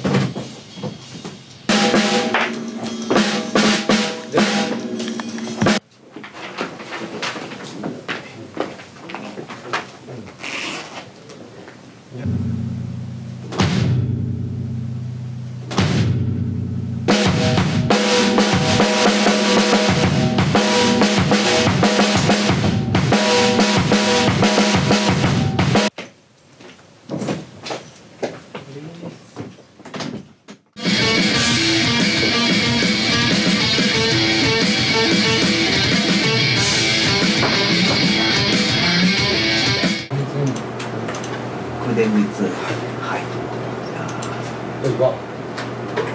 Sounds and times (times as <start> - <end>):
Music: 1.7 - 5.8, 12.3 - 25.9, 30.8 - 40.1.